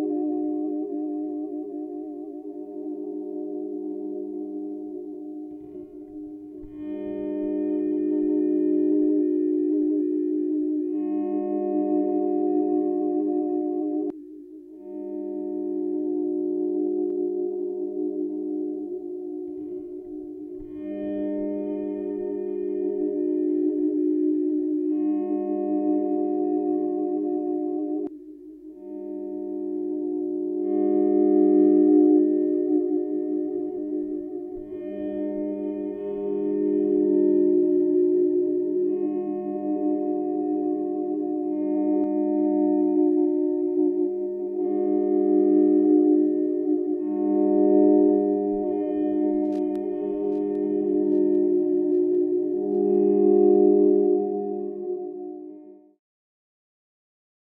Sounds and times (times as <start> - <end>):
Music: 0.0 - 56.0.